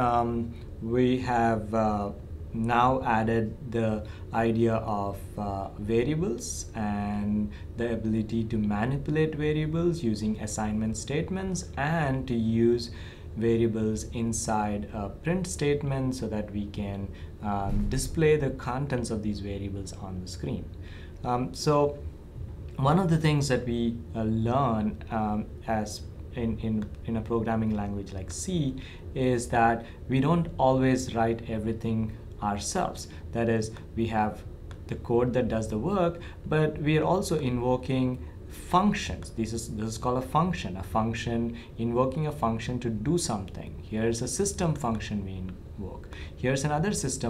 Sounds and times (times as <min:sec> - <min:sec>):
Speech: 0:00.0 - 0:22.1, 0:22.8 - 0:47.2.